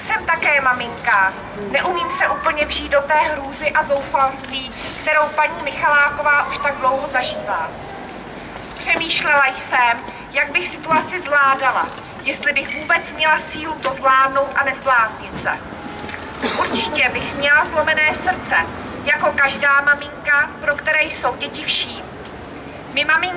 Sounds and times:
Female speech, woman speaking: 0:00.0 - 0:07.8, 0:08.8 - 0:15.6, 0:16.4 - 0:22.1, 0:22.9 - 0:23.3
Narration, monologue: 0:00.0 - 0:23.3.

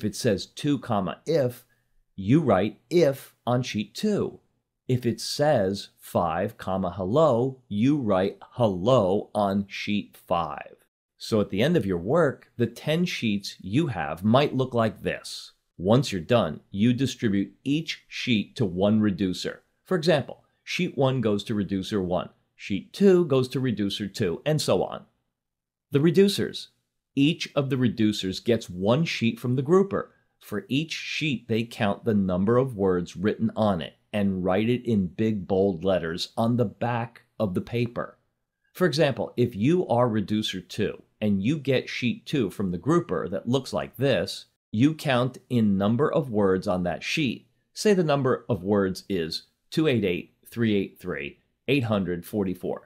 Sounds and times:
Narration, monologue: 0:00.0 - 0:52.8.

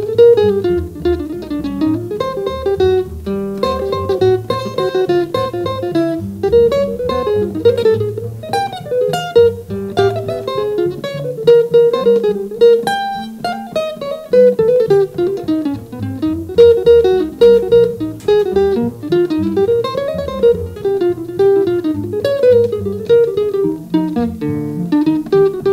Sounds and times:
Guitar: 0:00.0 - 0:25.7.

